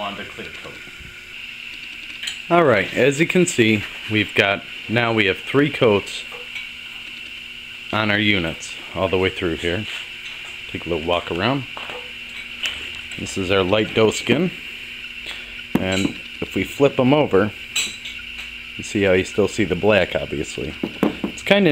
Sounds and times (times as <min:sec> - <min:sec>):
Speech: 0:00.0 - 0:00.8, 0:02.5 - 0:06.2, 0:07.9 - 0:09.9, 0:10.7 - 0:11.7, 0:13.2 - 0:14.6, 0:15.8 - 0:17.6, 0:18.8 - 0:20.8, 0:21.4 - 0:21.7.